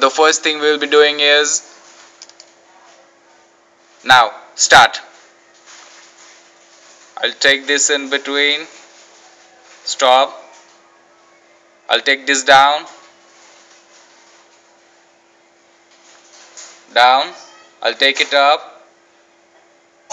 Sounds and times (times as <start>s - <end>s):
Speech: 0.0s - 1.7s, 4.0s - 5.2s, 7.2s - 13.1s, 16.9s - 18.9s.